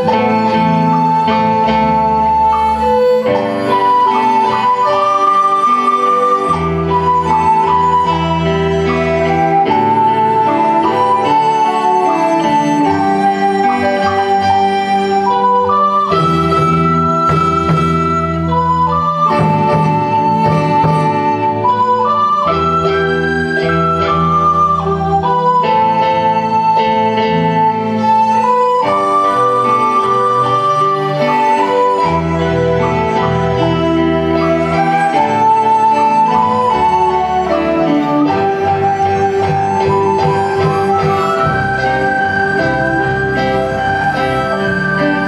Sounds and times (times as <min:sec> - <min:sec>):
Violin, fiddle: 0:00.0 - 0:45.2.